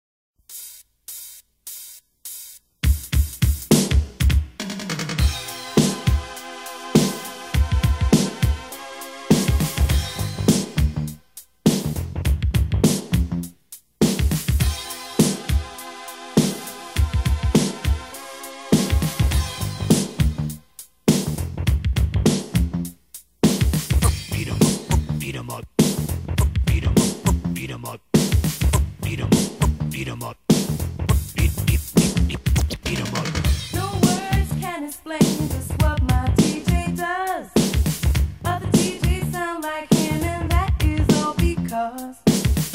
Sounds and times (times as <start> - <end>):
Drum machine: 0.4 - 6.4, 7.0 - 42.7.